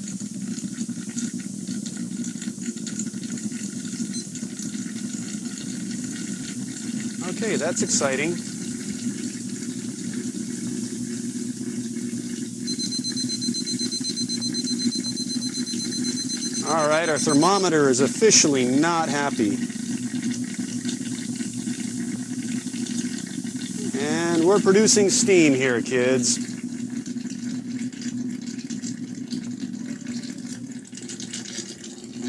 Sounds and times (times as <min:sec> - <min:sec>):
Boiling: 0:00.0 - 0:32.2
Speech: 0:07.2 - 0:08.4, 0:16.6 - 0:19.6, 0:23.9 - 0:26.4.